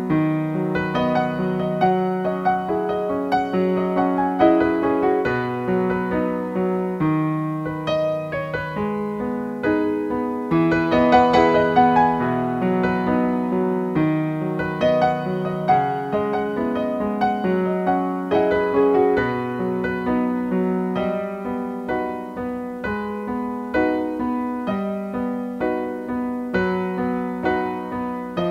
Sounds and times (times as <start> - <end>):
Electric piano: 0.0 - 28.5.